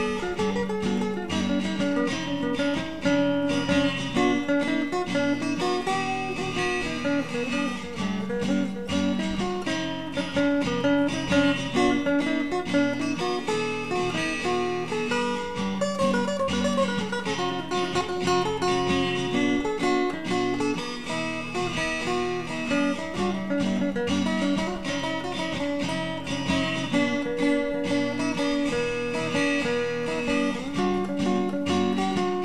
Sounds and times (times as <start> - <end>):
Acoustic guitar: 0.0 - 32.4
Strum: 0.0 - 32.4.